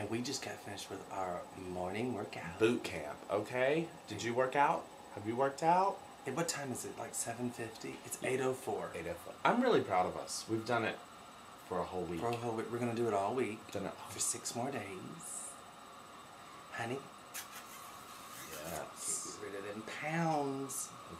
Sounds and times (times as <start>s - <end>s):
Speech: 0.0s - 11.0s, 18.5s - 21.1s.